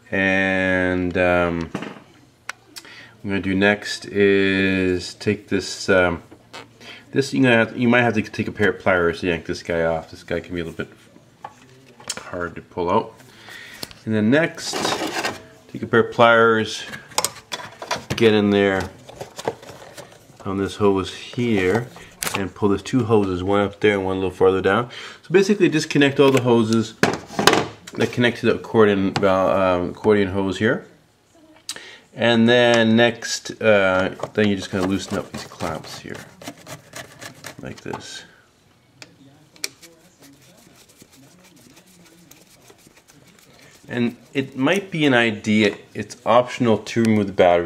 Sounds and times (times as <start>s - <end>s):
Speech: 0.0s - 1.7s, 3.2s - 6.3s, 7.1s - 13.2s, 14.0s - 17.1s, 18.1s - 19.1s, 20.4s - 27.0s, 27.9s - 36.6s, 37.2s - 38.4s, 39.0s - 47.6s
Inside, small room: 0.0s - 47.6s.